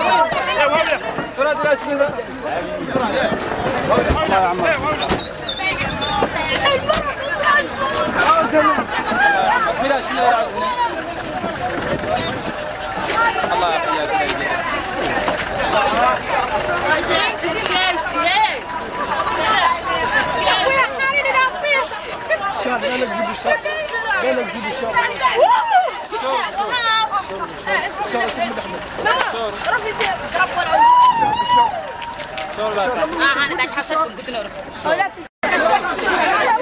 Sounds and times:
Crowd: 0.0 - 36.6
Hubbub, speech noise, speech babble: 0.0 - 36.6.

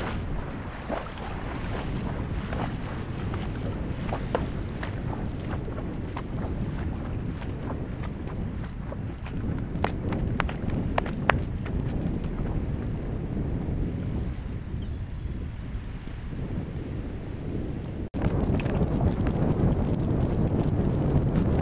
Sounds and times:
Horse: 0.0 - 13.9
Outside, rural or natural: 0.0 - 21.6.

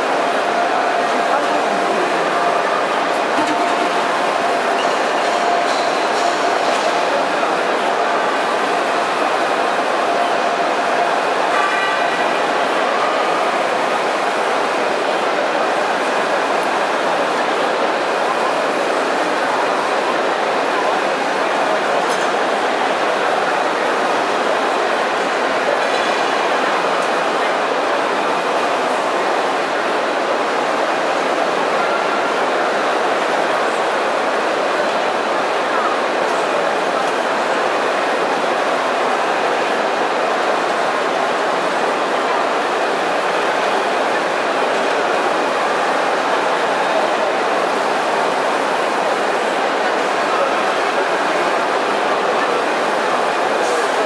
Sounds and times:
Printer: 0.0 - 22.6.

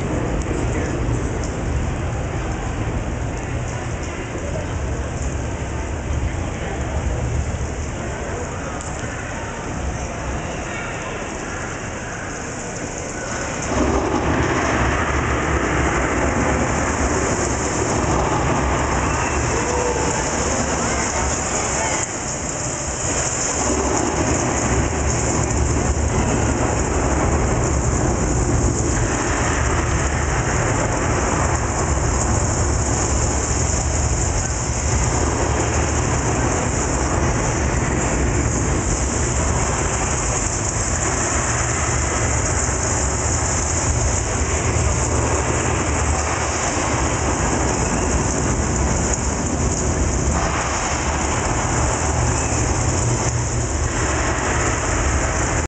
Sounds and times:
Rain: 0.0 - 55.6
Thunder: 13.1 - 55.6.

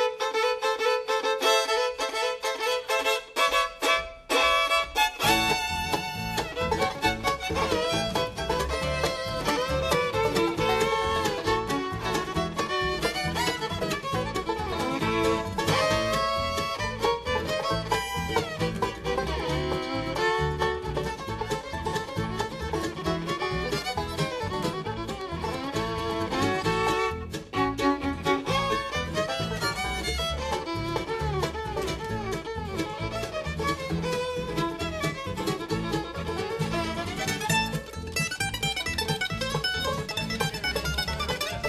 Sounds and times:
Violin, fiddle: 0.0 - 41.6.

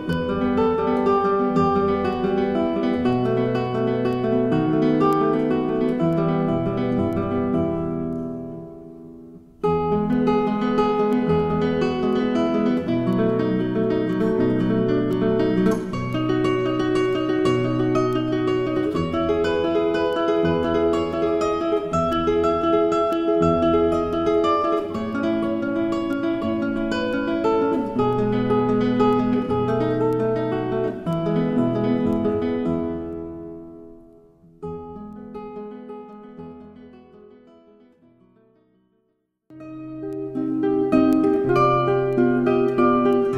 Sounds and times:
Acoustic guitar: 0.0 - 43.3.

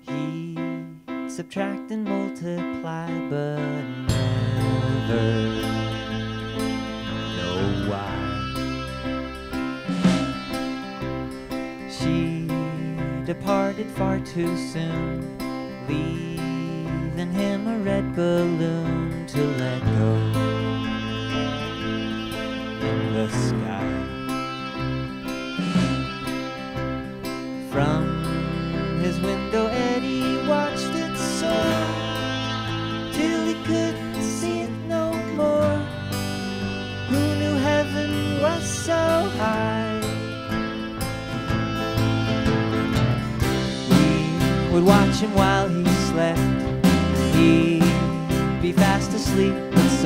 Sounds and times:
Music: 0.0 - 50.0.

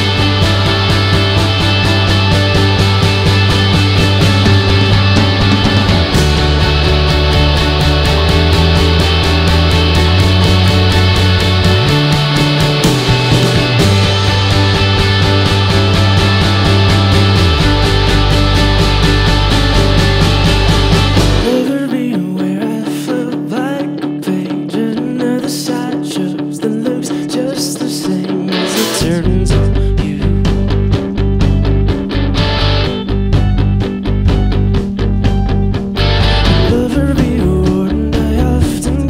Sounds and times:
Music: 0.0 - 39.0.

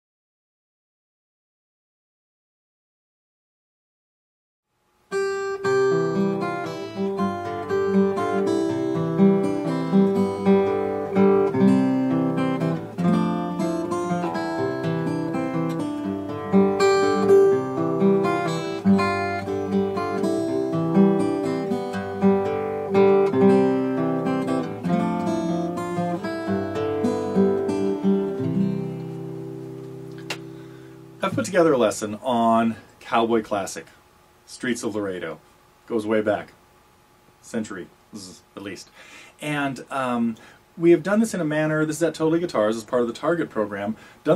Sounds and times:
Guitar: 5.1 - 34.0.

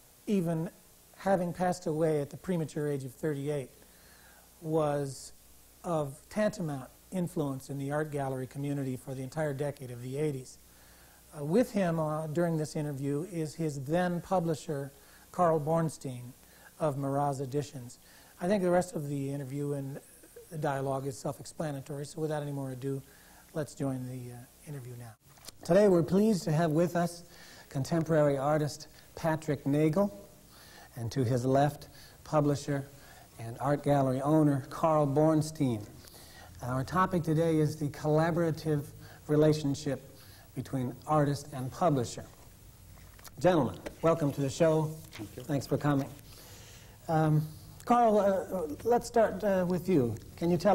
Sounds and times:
Speech: 0.3 - 3.8, 4.6 - 10.6, 11.3 - 30.2, 30.9 - 35.9, 36.6 - 42.4, 43.3 - 46.2, 47.1 - 50.7.

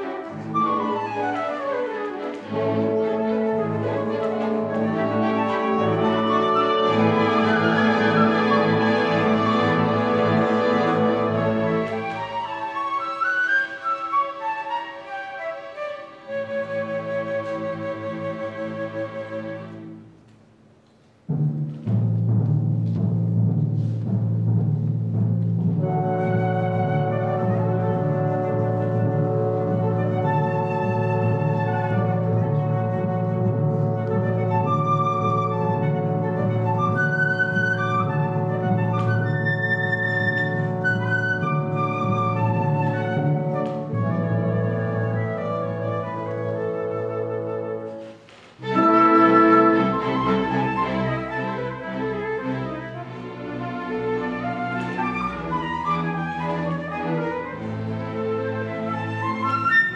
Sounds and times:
Flute: 0.0 - 20.2, 25.8 - 59.9
Orchestra: 0.0 - 59.9
Timpani: 0.0 - 59.9.

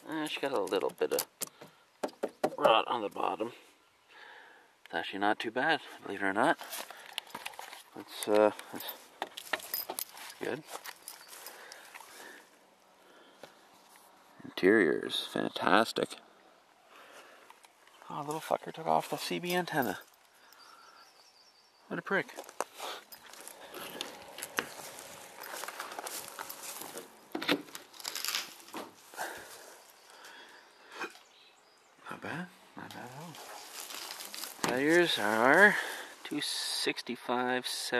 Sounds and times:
Speech: 0.0 - 1.3, 2.6 - 3.6, 4.9 - 6.6, 8.0 - 9.0, 10.4 - 10.7, 14.4 - 16.2, 18.0 - 20.0, 21.9 - 22.4, 32.1 - 33.4, 34.7 - 37.9.

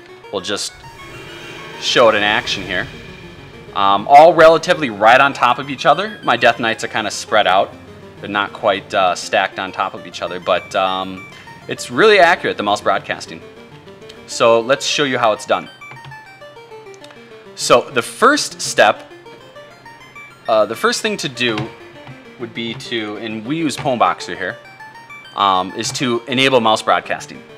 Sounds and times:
Speech: 0.4 - 0.8, 1.8 - 2.9, 3.8 - 13.4, 14.3 - 15.7, 17.6 - 19.0, 20.5 - 21.7, 22.4 - 24.6, 25.4 - 27.5.

